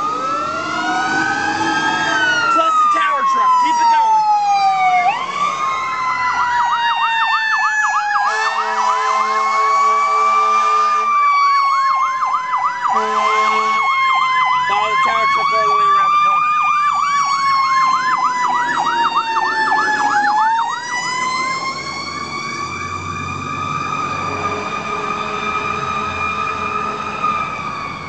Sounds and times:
Vehicle: 0:00.0 - 0:28.0
Speech: 0:02.5 - 0:04.1, 0:14.7 - 0:16.4.

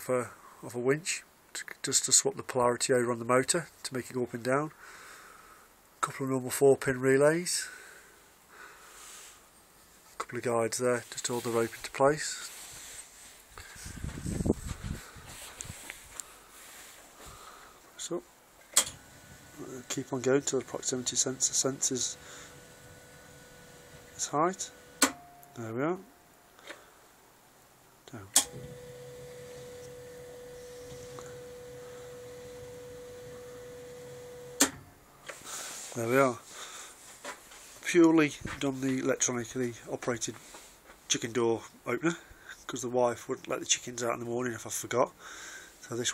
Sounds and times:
Speech: 0:00.0 - 0:04.8, 0:06.0 - 0:07.8, 0:10.2 - 0:12.5, 0:18.0 - 0:18.3, 0:19.6 - 0:22.2, 0:24.2 - 0:24.7, 0:25.6 - 0:26.1, 0:28.1 - 0:28.4, 0:36.0 - 0:36.5, 0:37.8 - 0:40.4, 0:41.1 - 0:45.2, 0:45.8 - 0:46.1.

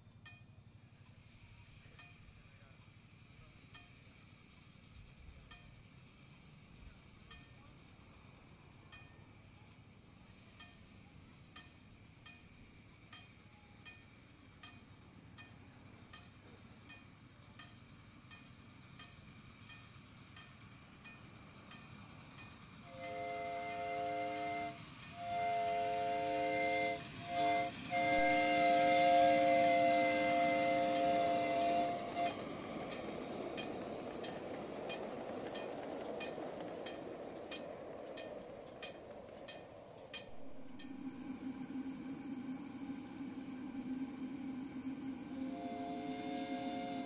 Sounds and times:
Train: 0:00.0 - 0:47.0.

